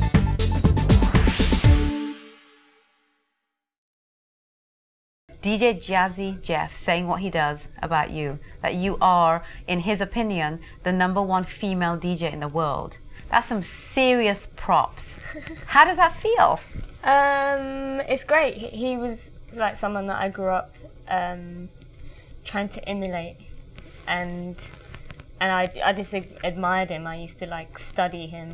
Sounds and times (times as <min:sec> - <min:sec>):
Female speech, woman speaking: 0:05.4 - 0:21.7, 0:22.4 - 0:23.4, 0:24.1 - 0:24.8, 0:25.4 - 0:28.5.